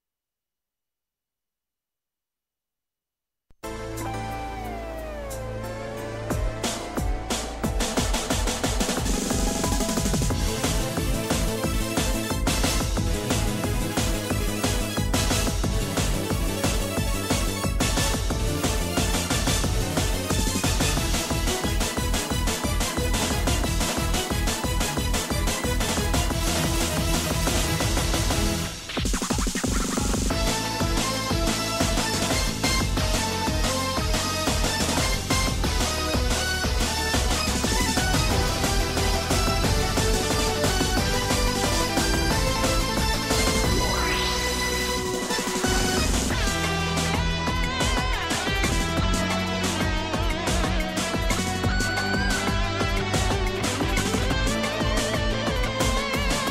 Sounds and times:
Music: 0:03.5 - 0:56.5.

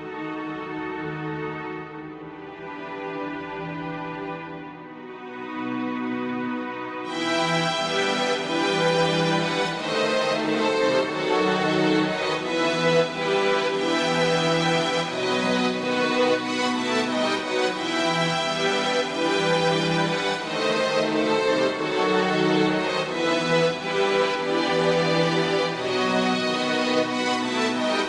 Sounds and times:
Music: 0:00.0 - 0:28.0.

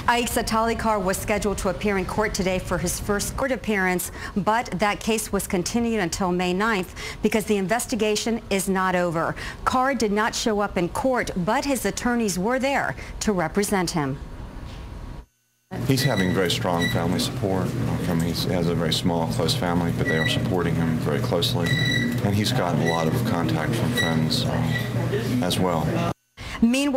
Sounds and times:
Speech: 0:15.8 - 0:26.9.

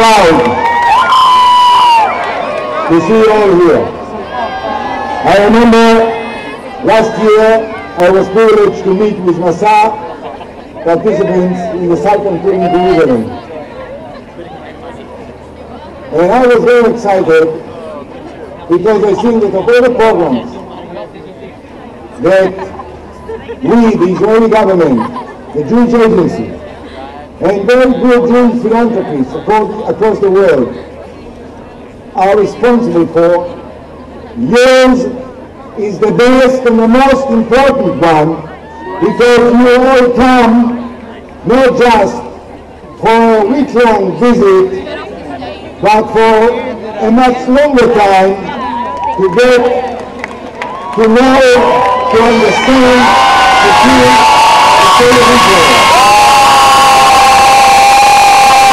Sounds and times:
Male speech, man speaking: 0:00.0 - 0:00.6, 0:02.9 - 0:03.9, 0:05.2 - 0:06.2, 0:06.8 - 0:10.0, 0:10.8 - 0:13.4, 0:16.1 - 0:17.6, 0:18.7 - 0:20.6, 0:22.2 - 0:22.7, 0:23.6 - 0:26.6, 0:27.4 - 0:30.8, 0:32.2 - 0:33.5, 0:34.4 - 0:35.2, 0:35.8 - 0:40.8, 0:41.4 - 0:42.3, 0:43.0 - 0:44.8, 0:45.8 - 0:48.6, 0:49.2 - 0:49.8, 0:51.0 - 0:54.2, 0:55.0 - 0:55.8.

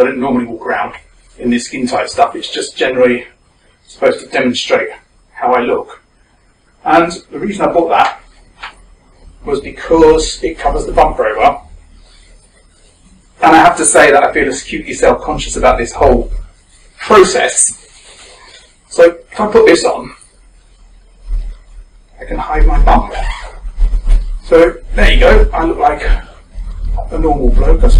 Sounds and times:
Male speech, man speaking: 0:00.0 - 0:06.0, 0:06.8 - 0:08.3, 0:09.4 - 0:11.7, 0:13.4 - 0:16.4, 0:17.0 - 0:17.9, 0:18.9 - 0:20.2, 0:22.2 - 0:23.5, 0:24.4 - 0:28.0.

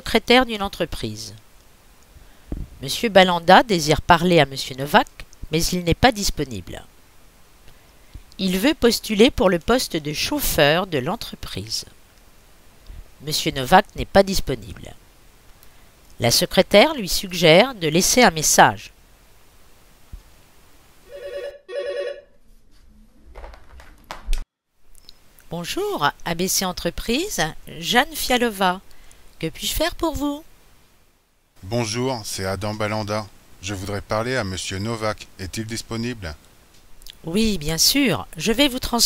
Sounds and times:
Speech: 0:00.0 - 0:01.4, 0:02.8 - 0:06.9, 0:08.4 - 0:12.0, 0:13.2 - 0:15.0, 0:16.2 - 0:18.9, 0:25.5 - 0:28.8, 0:29.4 - 0:30.5, 0:31.6 - 0:36.4, 0:37.1 - 0:39.0.

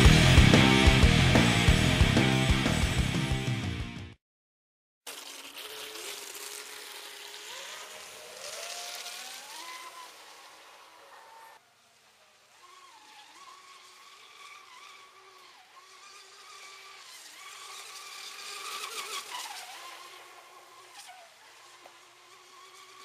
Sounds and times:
Exciting music: 0:00.0 - 0:04.2.

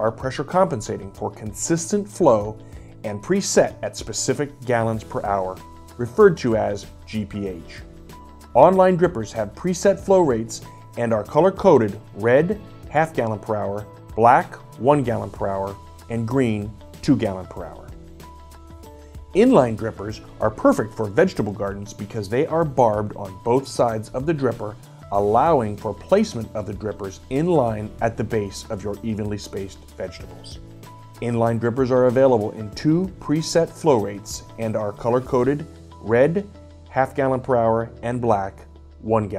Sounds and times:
Speech: 0:00.0 - 0:07.9, 0:08.6 - 0:18.0, 0:19.4 - 0:30.6, 0:31.2 - 0:39.3
Music: 0:00.0 - 0:39.3.

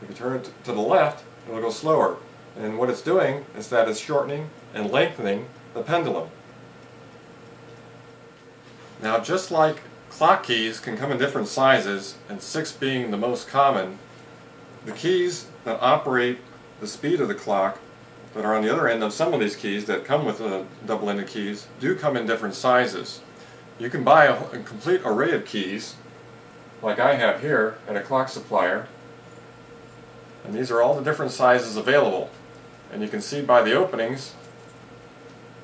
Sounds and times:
Speech: 0:00.0 - 0:06.4, 0:09.0 - 0:14.0, 0:14.8 - 0:17.8, 0:18.4 - 0:26.0, 0:26.8 - 0:29.0, 0:30.4 - 0:34.4.

